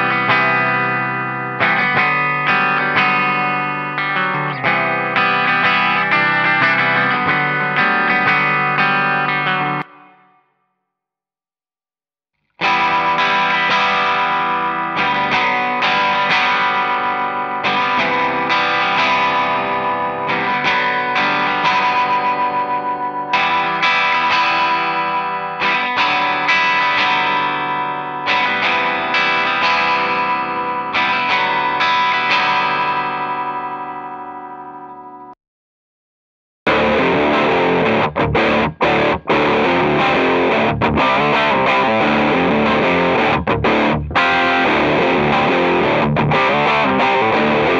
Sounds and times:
Guitar: 0.0s - 10.8s, 12.4s - 35.4s, 36.7s - 47.7s.

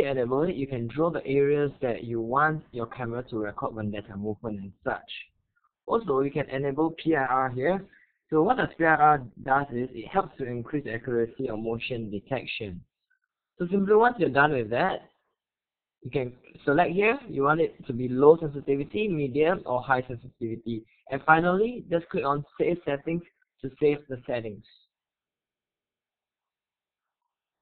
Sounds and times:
Speech: 0.0s - 12.9s, 13.6s - 15.1s, 16.0s - 24.9s.

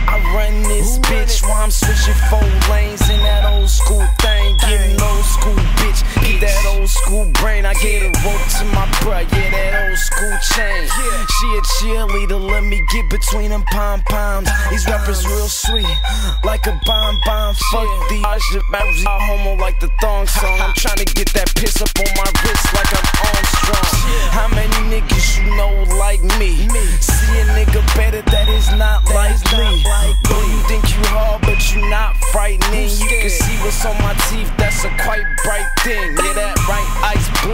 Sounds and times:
Music: 0.0s - 37.5s.

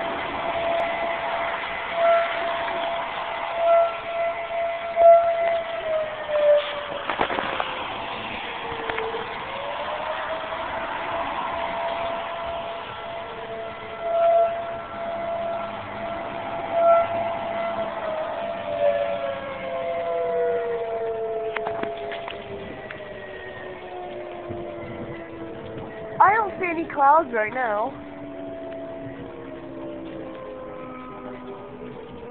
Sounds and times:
Civil defense siren: 0.0s - 32.3s.

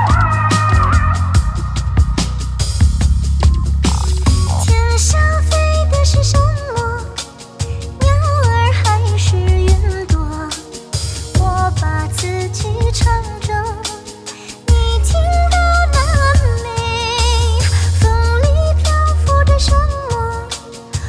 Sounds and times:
Music: 0.0s - 21.0s.

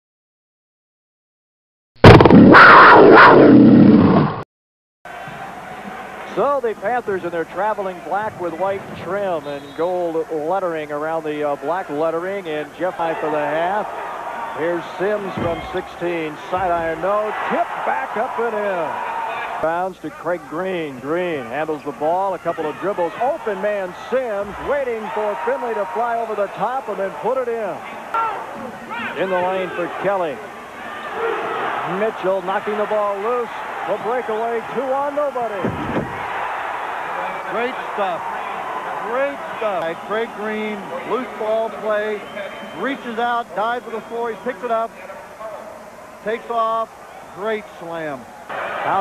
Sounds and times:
Inside, large room or hall: 5.1s - 49.0s
Speech: 6.3s - 13.9s, 14.6s - 19.0s, 19.6s - 27.9s, 28.9s - 30.4s, 31.9s - 35.7s, 39.0s - 45.6s.

